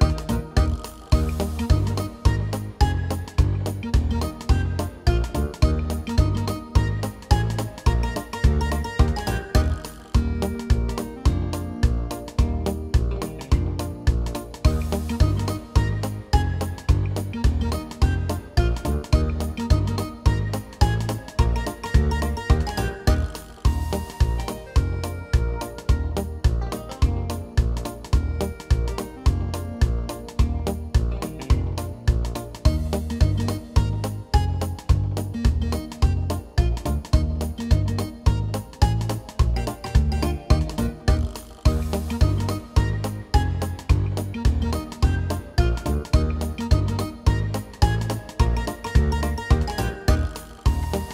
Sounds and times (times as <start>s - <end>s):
Music: 0.0s - 51.1s.